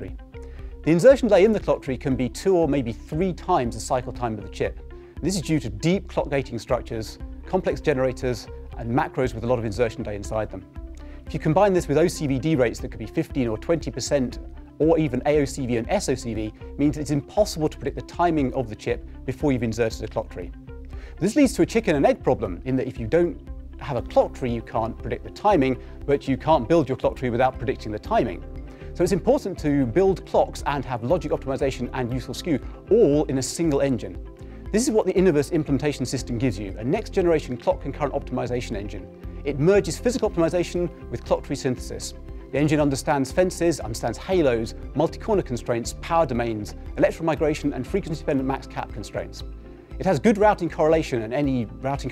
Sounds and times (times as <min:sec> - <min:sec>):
Speech: 0:00.0 - 0:00.2, 0:00.9 - 0:10.7, 0:11.3 - 0:20.5, 0:21.2 - 0:28.4, 0:29.0 - 0:52.1
Music: 0:00.0 - 0:52.1.